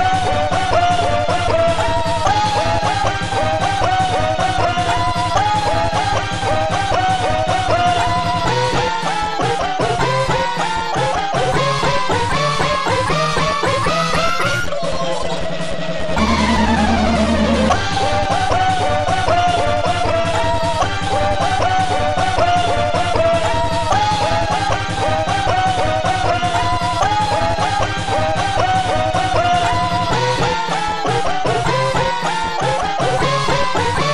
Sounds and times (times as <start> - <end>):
Sound effect: 0.0 - 24.8.